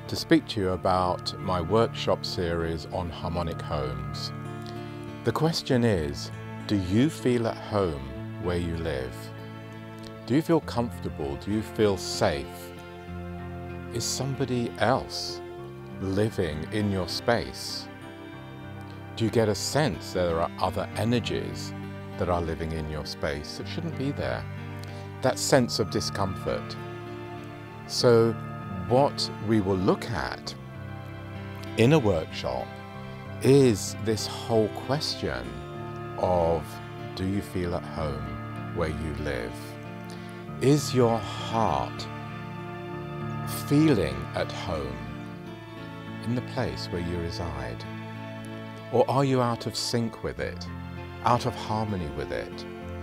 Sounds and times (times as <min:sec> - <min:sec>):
Music: 0:00.0 - 0:53.0
Speech: 0:00.1 - 0:04.3, 0:05.2 - 0:09.3, 0:10.3 - 0:12.7, 0:13.9 - 0:15.4, 0:16.0 - 0:17.9, 0:19.2 - 0:24.4, 0:25.2 - 0:26.8, 0:27.9 - 0:30.6, 0:31.7 - 0:32.7, 0:33.4 - 0:35.6, 0:36.2 - 0:39.7, 0:40.6 - 0:42.1, 0:43.5 - 0:45.1, 0:46.2 - 0:47.8, 0:48.9 - 0:52.7.